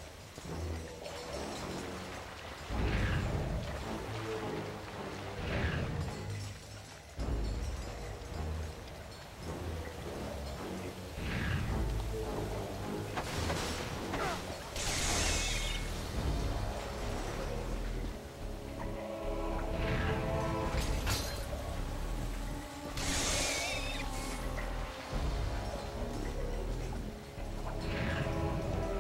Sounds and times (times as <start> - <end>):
Music: 0.0 - 29.0.